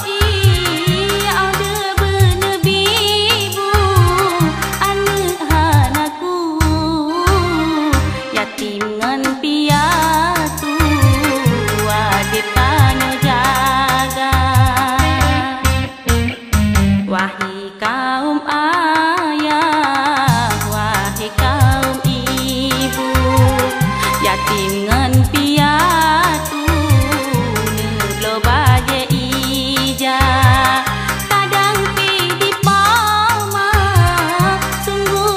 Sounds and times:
Music: 0.0 - 35.3.

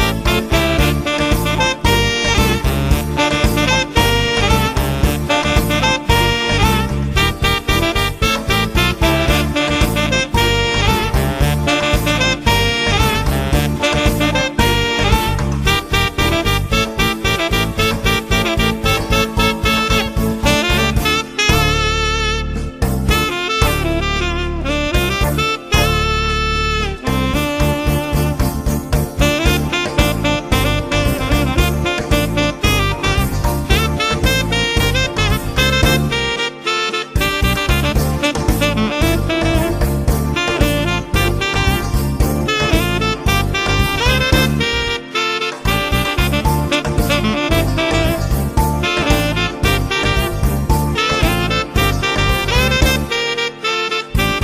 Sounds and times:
Music: 0.0 - 54.4.

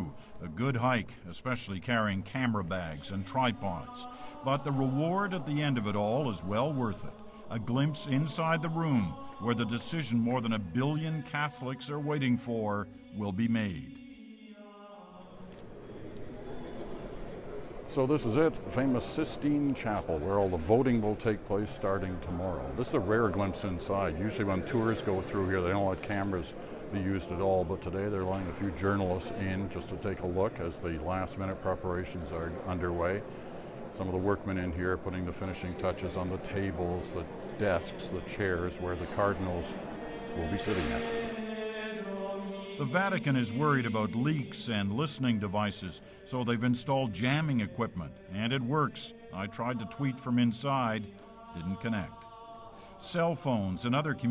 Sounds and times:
Speech: 0.0 - 14.0, 17.9 - 33.2, 34.0 - 39.8, 40.4 - 41.0, 42.8 - 52.2, 53.0 - 54.3.

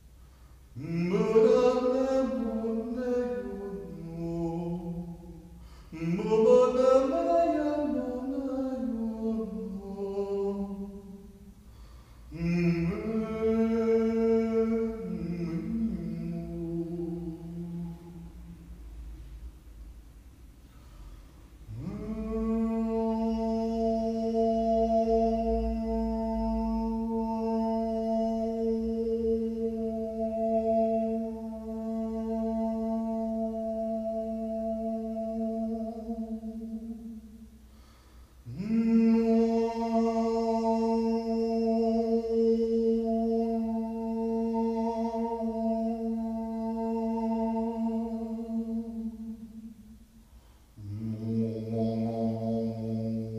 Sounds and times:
Male singing: 0.8 - 11.3, 12.3 - 18.3, 21.7 - 37.3, 38.5 - 49.7, 50.8 - 53.3.

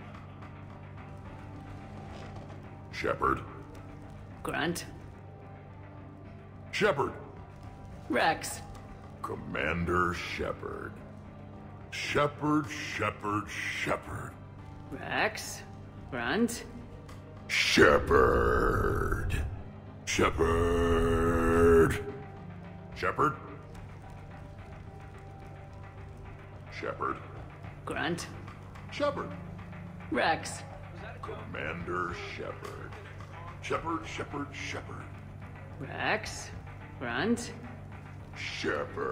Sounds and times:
Music: 0.0 - 39.1
Speech: 4.4 - 4.9, 8.1 - 8.6, 11.9 - 16.7, 26.7 - 29.4, 30.1 - 35.1, 35.8 - 37.6.

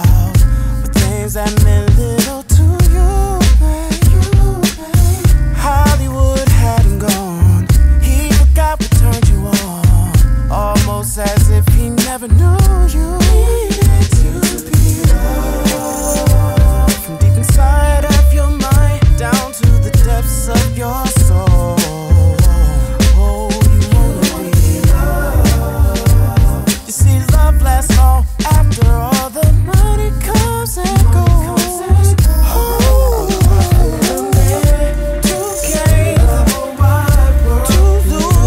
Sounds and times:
Rhythm and blues: 0.0 - 38.4.

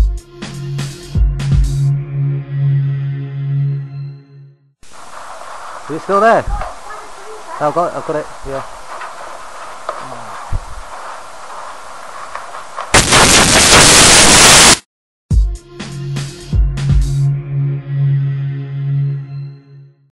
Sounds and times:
Music: 0.0 - 4.8, 15.3 - 20.1.

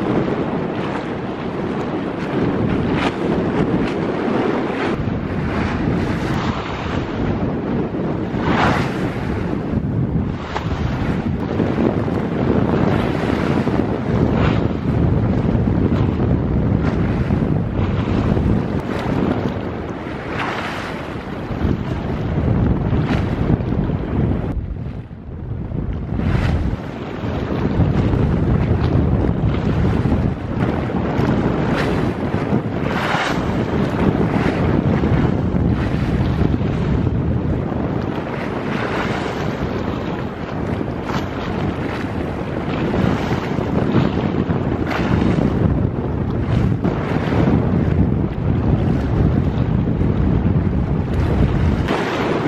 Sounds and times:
Boat, Water vehicle: 0.0 - 52.4
Waves, surf: 0.0 - 52.4
Wind noise (microphone): 0.0 - 52.4.

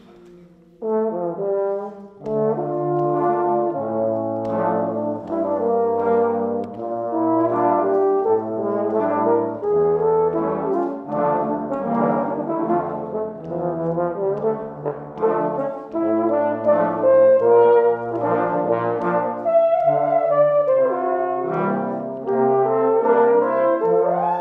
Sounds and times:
Trombone: 0.0 - 24.4.

